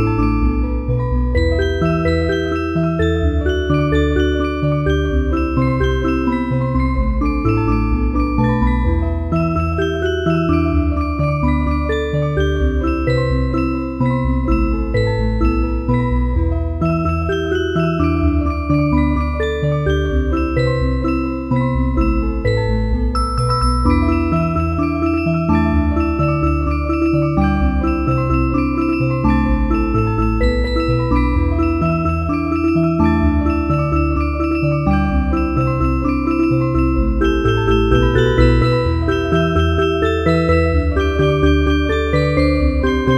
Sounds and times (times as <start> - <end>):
Music: 0.0 - 43.1.